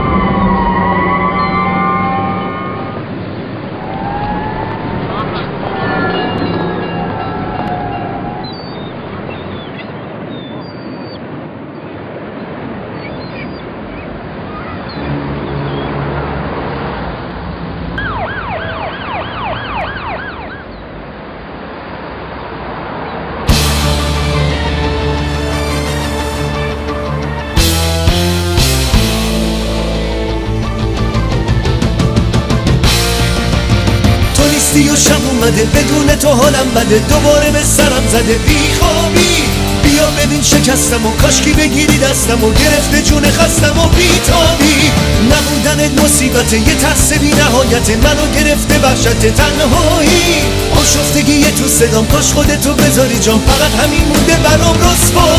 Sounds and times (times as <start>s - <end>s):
Outside, urban or manmade: 0.0s - 55.3s.